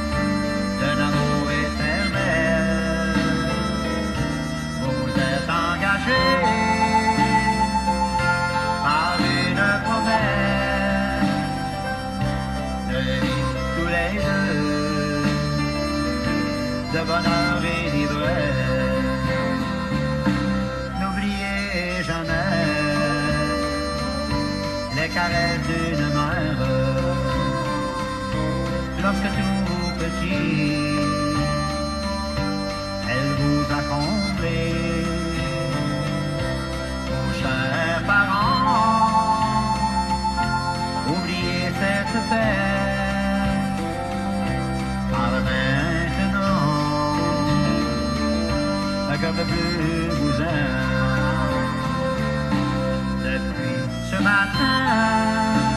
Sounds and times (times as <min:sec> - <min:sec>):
Country: 0:00.0 - 0:55.7.